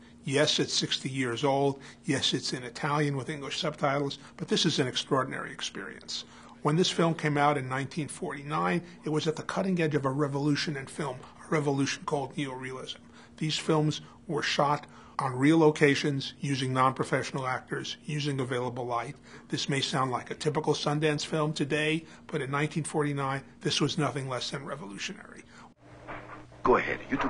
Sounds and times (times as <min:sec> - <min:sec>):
Speech: 0:00.3 - 0:25.5, 0:26.6 - 0:27.3.